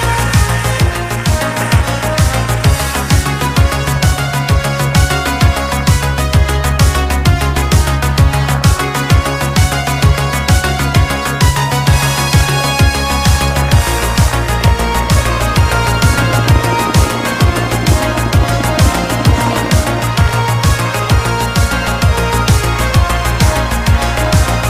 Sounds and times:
Music: 0:00.0 - 0:24.7.

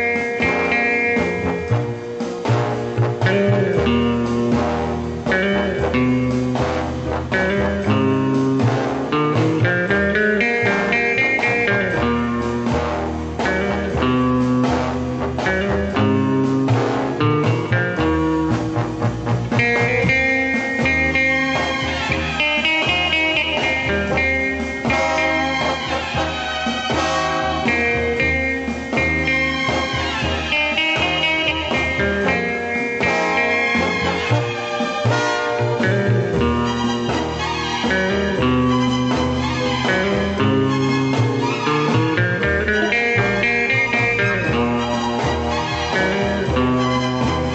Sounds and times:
Music: 0:00.0 - 0:47.5.

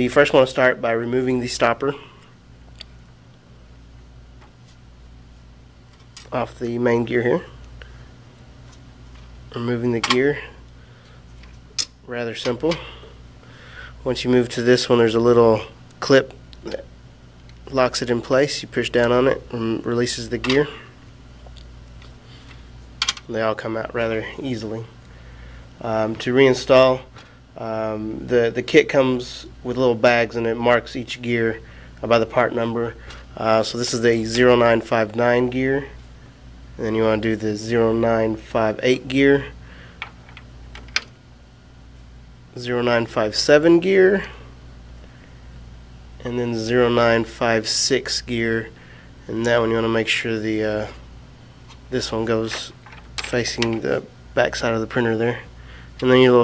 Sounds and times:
Speech: 0:00.0 - 0:02.1, 0:06.2 - 0:07.6, 0:09.5 - 0:10.6, 0:12.1 - 0:12.9, 0:14.0 - 0:16.9, 0:17.6 - 0:20.9, 0:23.3 - 0:24.9, 0:25.8 - 0:36.0, 0:36.8 - 0:39.6, 0:42.6 - 0:44.4, 0:46.2 - 0:51.0, 0:51.9 - 0:56.4.

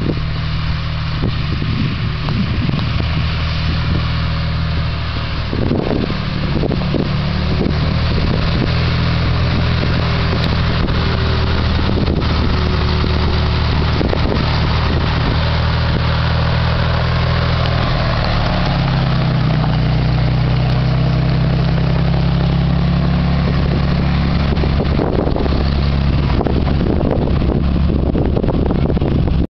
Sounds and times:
Truck: 0:00.0 - 0:29.5.

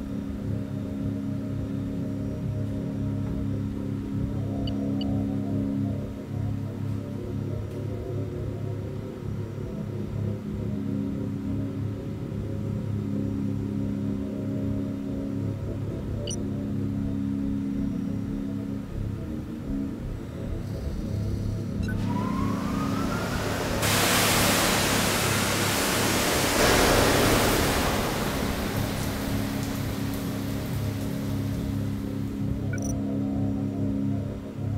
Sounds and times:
Music: 0:00.0 - 0:22.4, 0:31.2 - 0:34.7
Pink noise: 0:21.8 - 0:33.0.

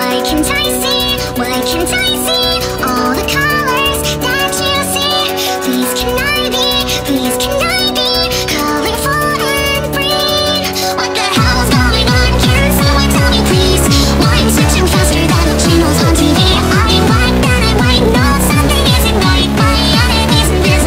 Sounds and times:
Music: 0:00.0 - 0:20.8.

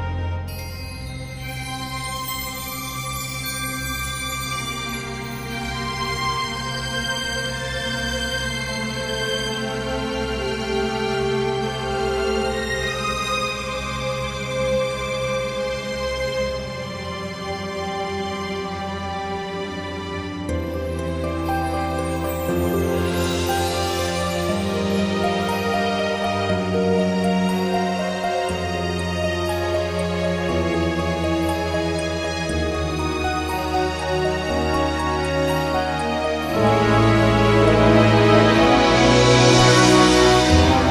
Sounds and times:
Music: 0:00.0 - 0:40.9.

